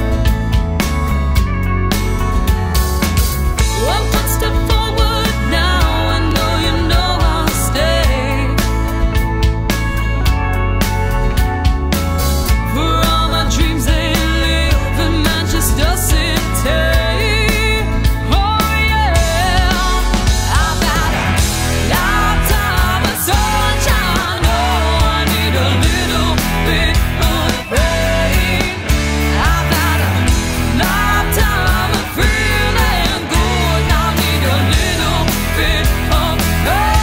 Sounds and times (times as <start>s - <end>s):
Music: 0.0s - 37.0s.